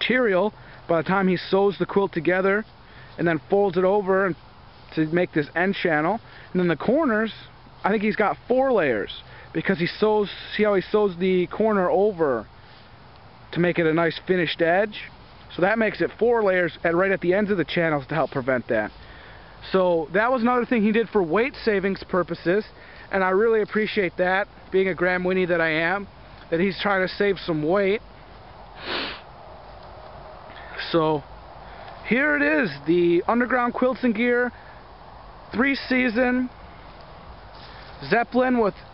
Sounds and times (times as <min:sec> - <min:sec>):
Speech: 0:00.0 - 0:12.5, 0:13.5 - 0:19.0, 0:19.6 - 0:28.0, 0:30.7 - 0:31.3, 0:32.0 - 0:34.6, 0:35.5 - 0:36.6, 0:38.0 - 0:38.8
Outside, rural or natural: 0:00.0 - 0:38.9.